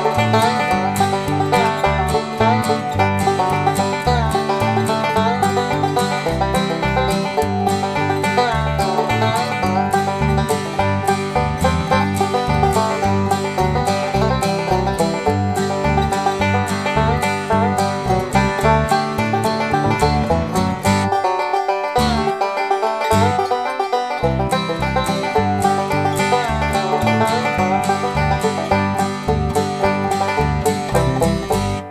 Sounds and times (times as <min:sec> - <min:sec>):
Music: 0:00.0 - 0:31.9.